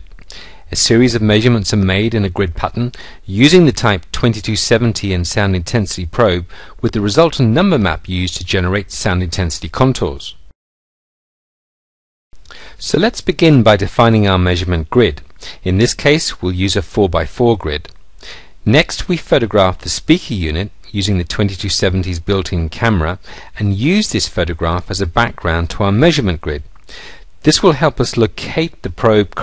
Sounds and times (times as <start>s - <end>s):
Speech: 0.7s - 10.4s, 12.8s - 18.0s, 18.6s - 26.7s, 27.4s - 29.4s.